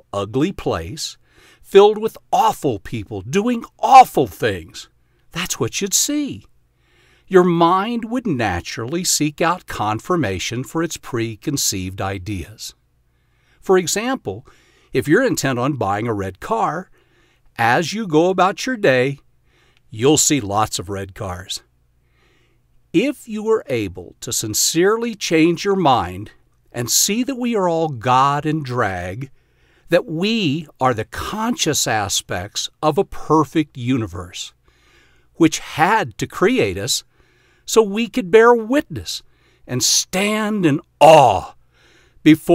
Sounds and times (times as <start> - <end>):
Speech: 0.0 - 6.5, 7.3 - 12.8, 13.6 - 16.9, 17.6 - 19.2, 19.9 - 21.7, 23.0 - 29.3, 29.9 - 34.6, 35.4 - 37.1, 37.7 - 41.6, 42.2 - 42.5.